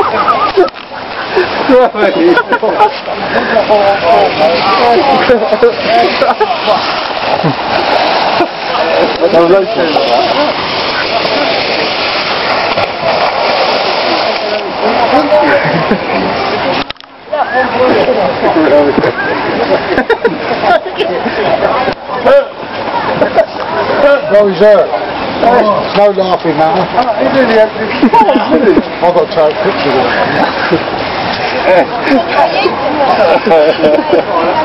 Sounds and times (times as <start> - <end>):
Water: 0.0 - 34.6.